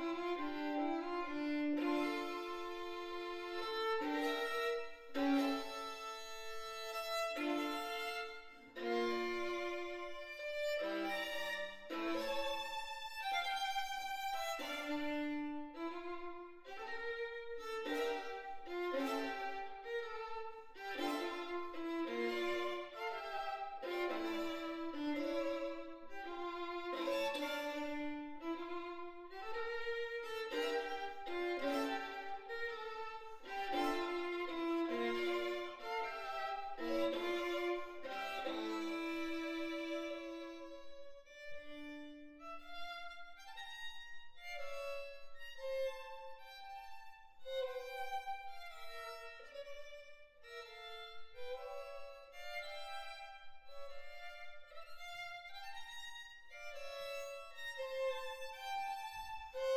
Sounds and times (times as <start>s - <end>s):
Violin, fiddle: 0.0s - 59.7s.